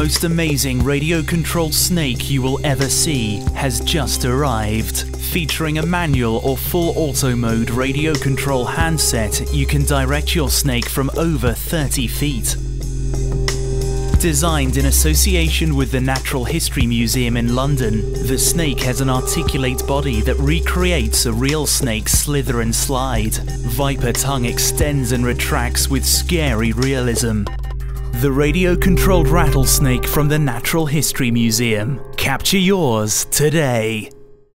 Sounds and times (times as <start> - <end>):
Speech: 0.0 - 12.6, 14.2 - 34.2
Music: 0.0 - 34.5.